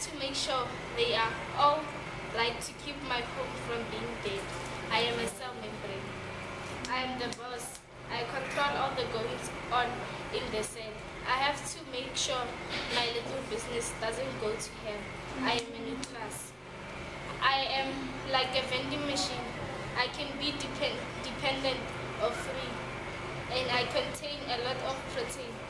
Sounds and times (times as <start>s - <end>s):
Speech: 0.0s - 6.1s, 6.9s - 16.5s, 17.4s - 22.8s, 23.5s - 25.6s.